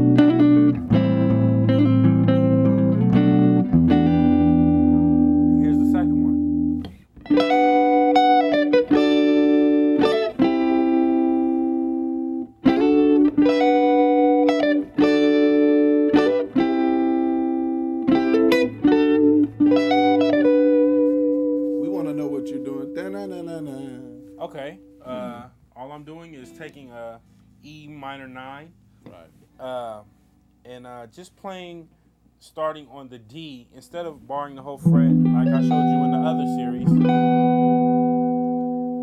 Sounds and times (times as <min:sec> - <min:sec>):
Strum: 0:00.0 - 0:30.2, 0:34.6 - 0:39.0.